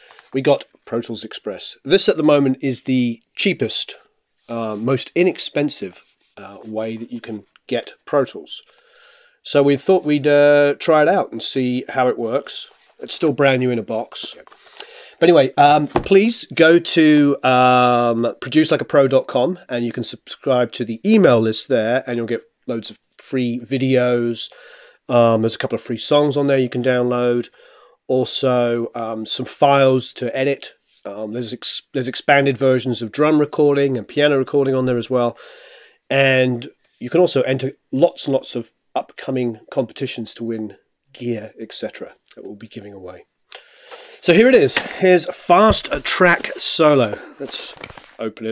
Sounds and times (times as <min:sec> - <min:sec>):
Speech: 0:00.4 - 0:08.7, 0:09.4 - 0:14.5, 0:15.2 - 0:24.5, 0:25.1 - 0:27.5, 0:28.1 - 0:35.4, 0:36.1 - 0:43.3, 0:44.2 - 0:48.5.